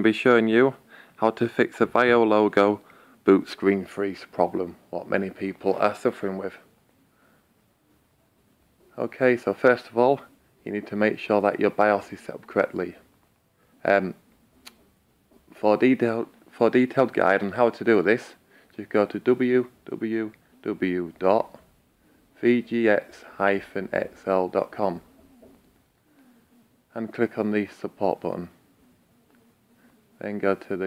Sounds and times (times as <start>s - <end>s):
Speech: 0.0s - 6.7s, 8.9s - 13.1s, 13.8s - 14.2s, 15.5s - 21.6s, 22.4s - 25.1s, 26.9s - 28.6s, 30.2s - 30.8s.